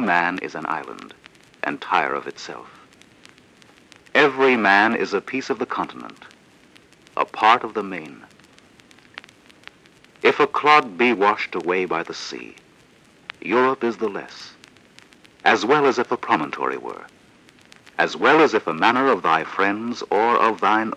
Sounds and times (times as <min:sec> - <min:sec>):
Speech: 0:00.0 - 0:02.8, 0:04.2 - 0:06.3, 0:07.2 - 0:08.3, 0:10.3 - 0:12.6, 0:13.4 - 0:14.6, 0:15.5 - 0:17.1, 0:18.0 - 0:20.9.